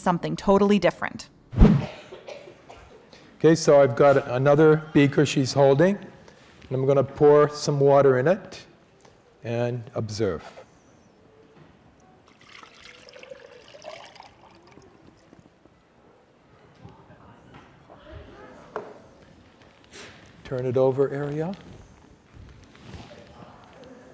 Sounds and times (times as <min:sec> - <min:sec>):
Water: 0:12.3 - 0:15.5.